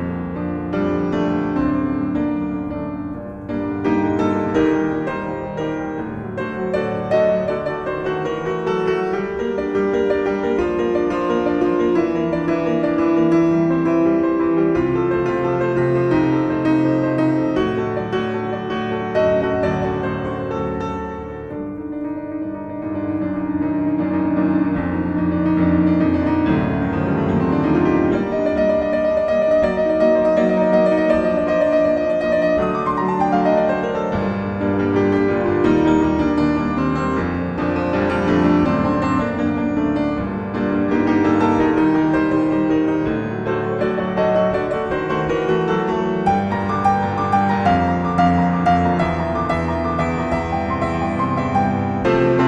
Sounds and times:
Music: 0.0 - 52.4.

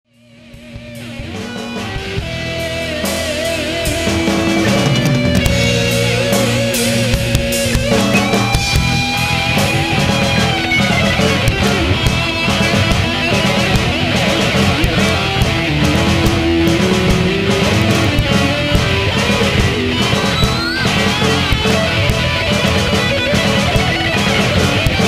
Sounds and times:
Rock music: 0.1 - 25.0.

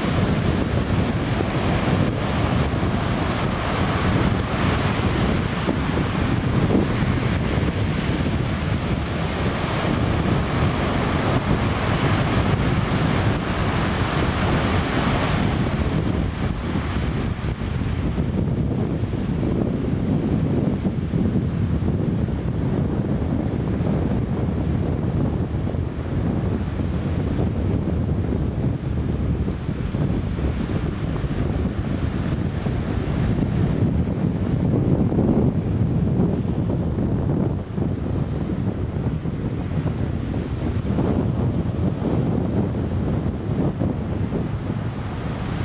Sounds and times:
Waves, surf: 0.0 - 45.6
Wind: 0.0 - 45.6.

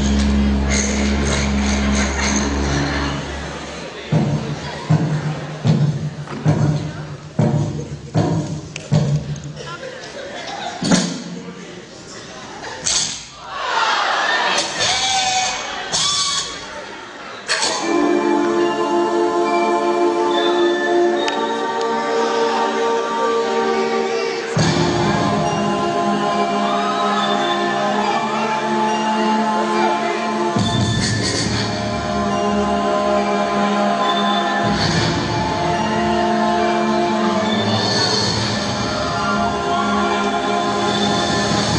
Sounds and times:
Electronic music: 0.0 - 5.6, 17.5 - 41.7.

